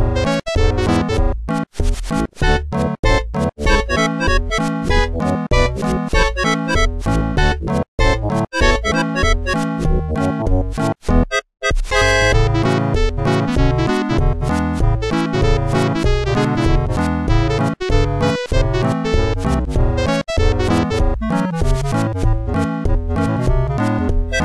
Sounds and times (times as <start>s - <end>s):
Music: 0.0s - 24.4s
Sound effect: 0.2s - 6.3s, 10.6s - 13.6s.